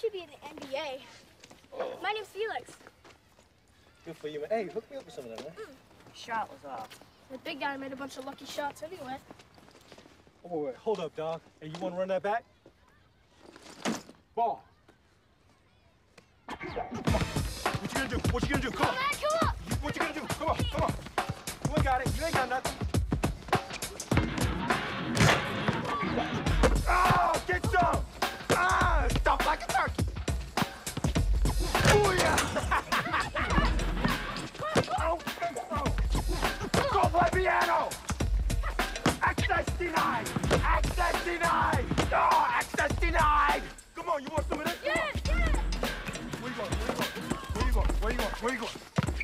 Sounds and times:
Music: 16.9 - 49.2.

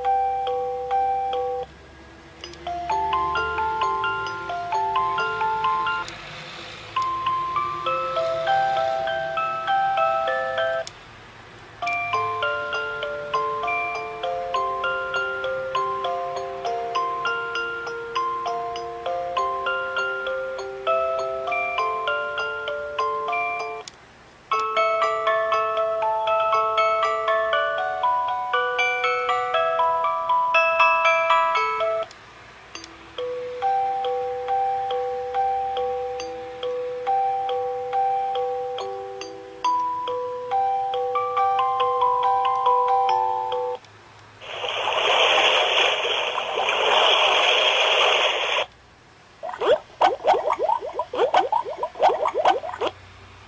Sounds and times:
Music: 0.0 - 10.9, 11.8 - 23.9, 24.5 - 43.9.

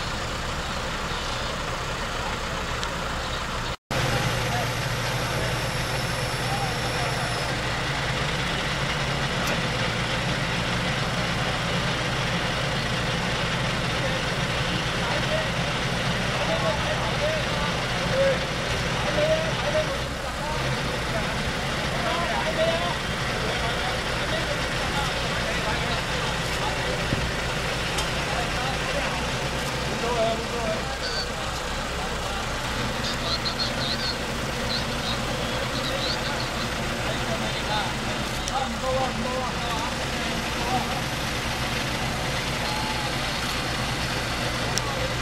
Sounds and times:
Outside, urban or manmade: 0.0 - 45.2
Vehicle: 0.0 - 45.2
Speech: 4.2 - 5.8, 6.4 - 7.6, 13.8 - 41.2, 42.1 - 43.8, 44.4 - 45.2.

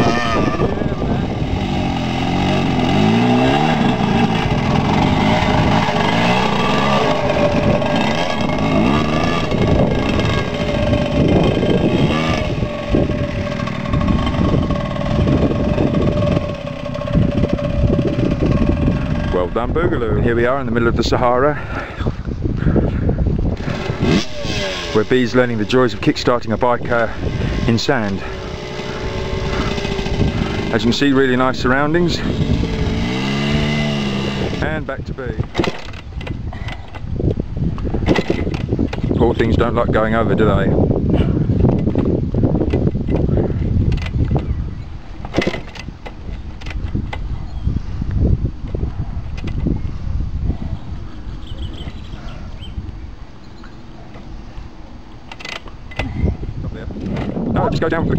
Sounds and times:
Motorcycle: 0.0 - 58.1
Outside, rural or natural: 0.0 - 58.1
Speech: 30.7 - 32.3, 34.6 - 35.4, 39.2 - 40.7, 57.6 - 58.1.

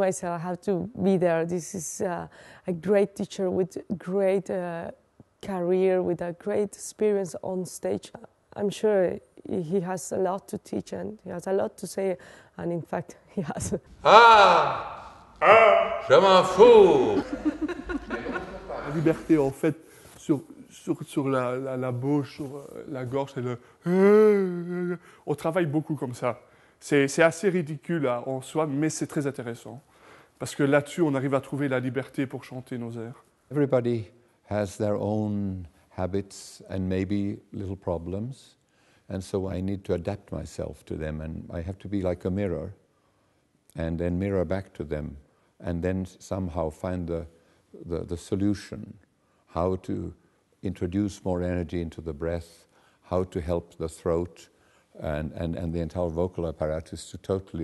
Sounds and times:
Speech: 13.4 - 17.3, 43.8 - 57.6.

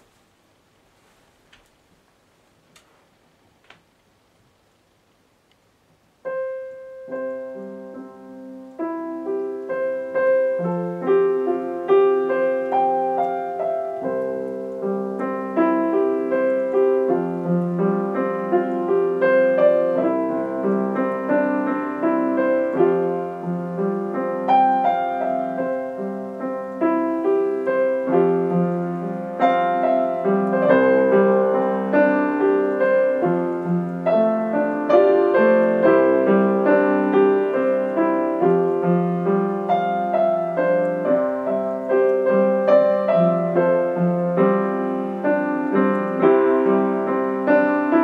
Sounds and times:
Music: 6.2 - 48.0.

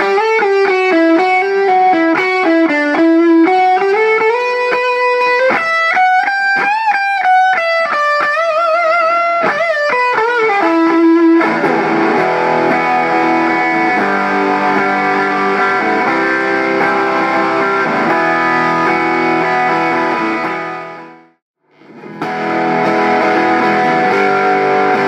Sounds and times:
Electric guitar: 0.0 - 25.0.

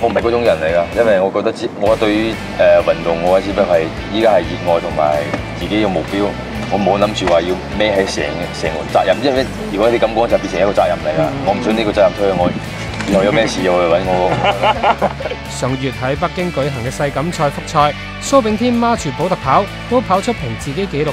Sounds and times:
Speech: 0.0 - 14.5, 15.5 - 21.1
Music: 0.0 - 21.1.

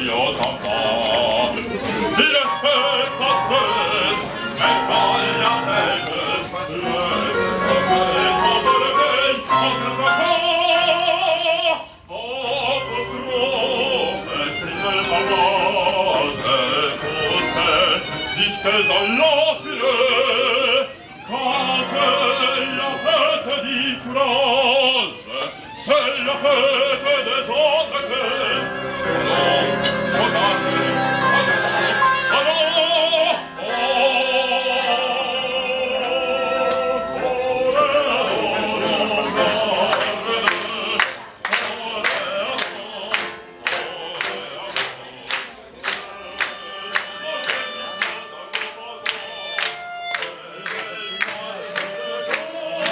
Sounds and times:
Male singing: 0.0 - 52.9
Music: 0.0 - 52.9.

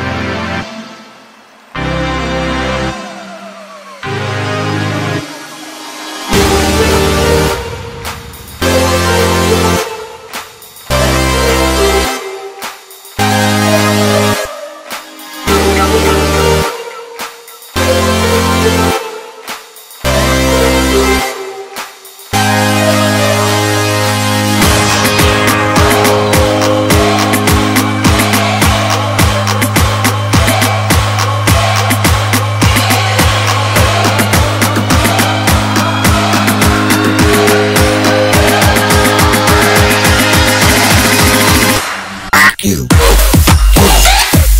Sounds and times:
Music: 0.0 - 44.5.

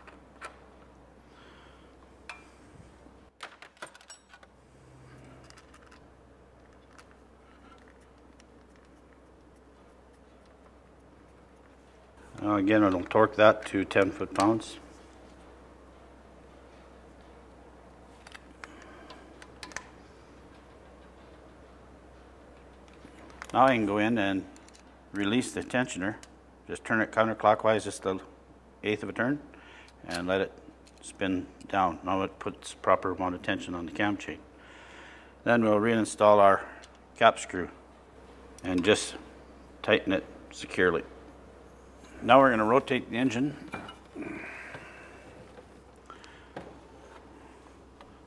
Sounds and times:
Speech: 12.4 - 14.8, 23.5 - 24.5, 25.2 - 34.4, 35.4 - 37.8, 38.6 - 39.2, 39.8 - 41.1, 42.2 - 43.7.

